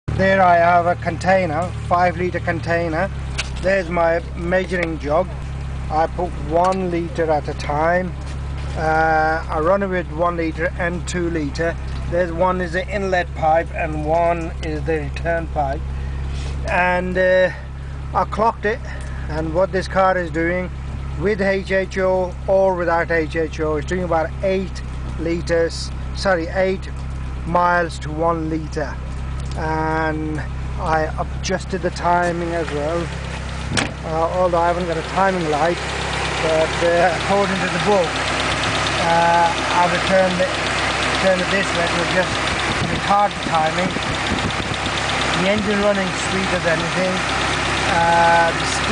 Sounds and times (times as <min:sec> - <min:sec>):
Car: 0:00.0 - 0:48.9
Engine: 0:00.0 - 0:48.9
Speech: 0:00.2 - 0:08.2, 0:08.8 - 0:15.8, 0:16.6 - 0:29.0, 0:29.6 - 0:33.1, 0:34.0 - 0:35.8, 0:36.4 - 0:38.2, 0:39.0 - 0:44.0, 0:45.4 - 0:47.3, 0:47.9 - 0:48.9.